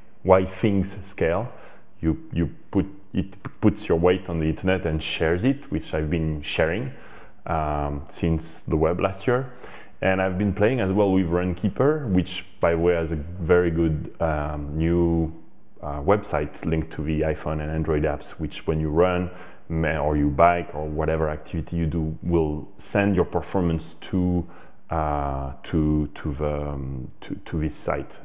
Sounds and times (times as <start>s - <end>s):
Speech: 0.2s - 28.2s.